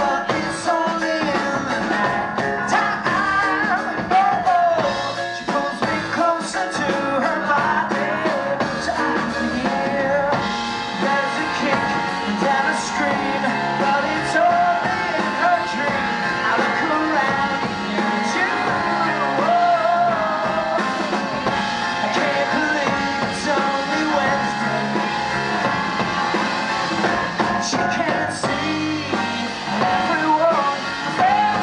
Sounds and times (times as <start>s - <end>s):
Singing: 0.0s - 25.2s, 27.6s - 31.6s
Rock and roll: 0.0s - 31.6s.